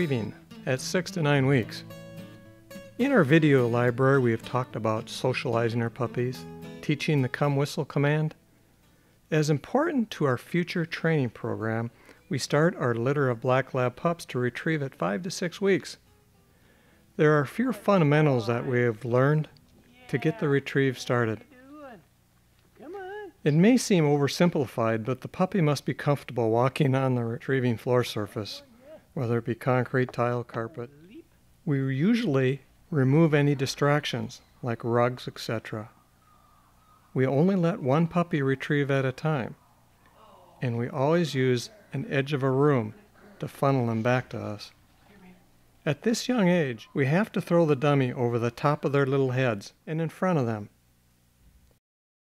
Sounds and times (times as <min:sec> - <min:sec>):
Speech: 0:00.0 - 0:01.9, 0:03.0 - 0:08.4, 0:09.3 - 0:16.0, 0:17.2 - 0:22.0, 0:22.8 - 0:35.9, 0:37.2 - 0:39.6, 0:40.2 - 0:50.8.